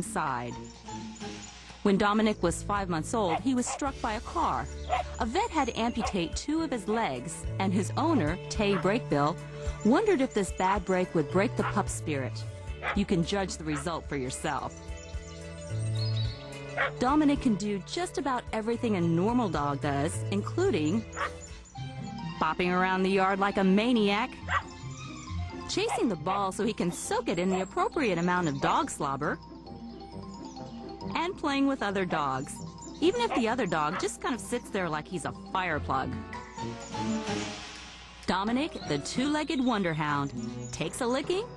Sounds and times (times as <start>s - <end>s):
Speech: 0.0s - 0.6s, 1.9s - 14.7s, 17.0s - 21.0s, 22.4s - 24.4s, 25.7s - 29.4s, 31.1s - 36.2s, 38.3s - 41.5s
Music: 0.0s - 41.5s.